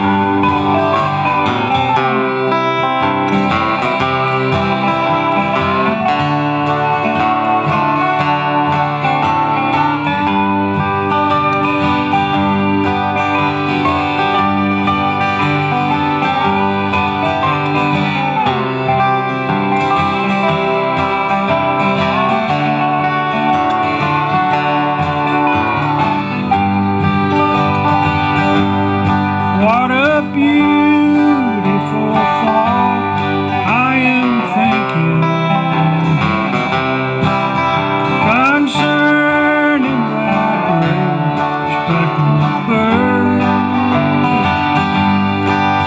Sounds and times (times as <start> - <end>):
Music: 0.0 - 45.8.